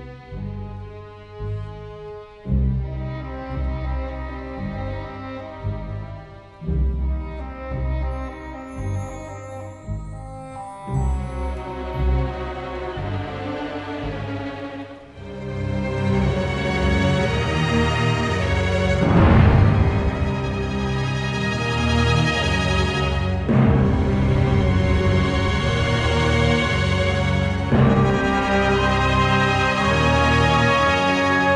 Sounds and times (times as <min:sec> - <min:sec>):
Scary music: 0:00.0 - 0:31.5.